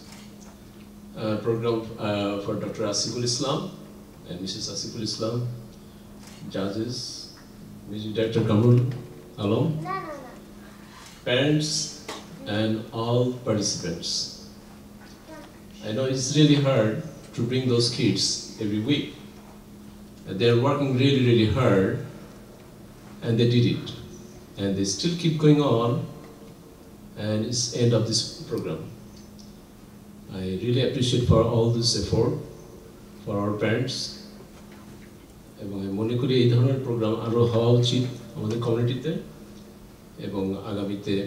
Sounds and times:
Narration, monologue: 0.0s - 41.2s
Male speech, man speaking: 1.2s - 5.6s, 6.4s - 9.8s, 11.2s - 14.4s, 15.8s - 19.3s, 20.3s - 22.1s, 23.2s - 26.2s, 27.2s - 29.0s, 30.3s - 32.5s, 33.2s - 34.3s, 35.6s - 39.3s, 40.2s - 41.2s.

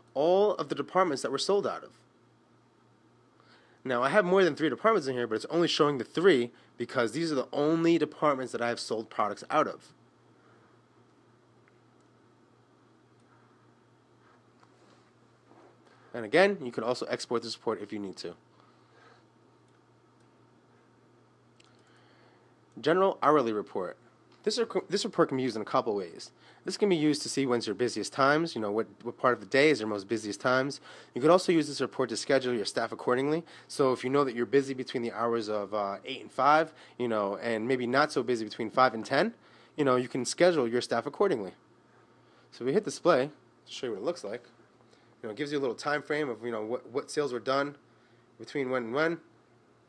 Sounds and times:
Speech: 0.1s - 2.0s, 3.8s - 10.0s, 16.1s - 18.4s, 22.8s - 41.6s, 42.5s - 44.5s, 45.2s - 47.8s, 48.4s - 49.3s.

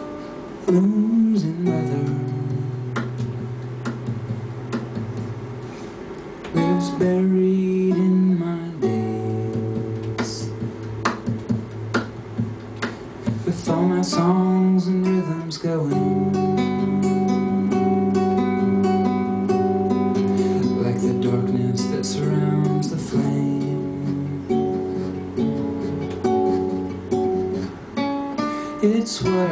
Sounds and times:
Music: 0.0s - 29.5s
Male singing: 0.7s - 3.0s, 6.6s - 10.6s, 13.4s - 16.4s, 20.6s - 24.5s, 28.8s - 29.5s.

